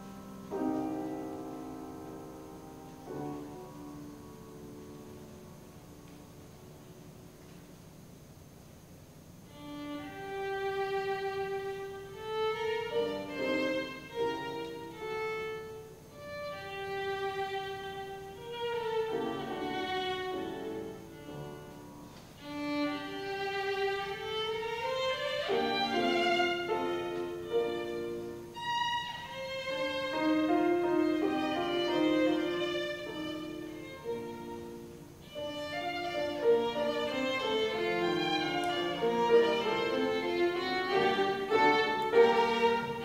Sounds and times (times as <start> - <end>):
Violin, fiddle: 9.5 - 43.0.